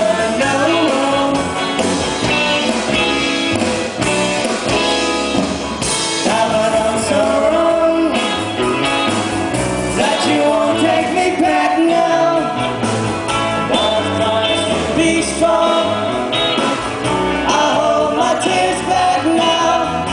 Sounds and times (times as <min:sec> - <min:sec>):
Music: 0:00.0 - 0:20.1.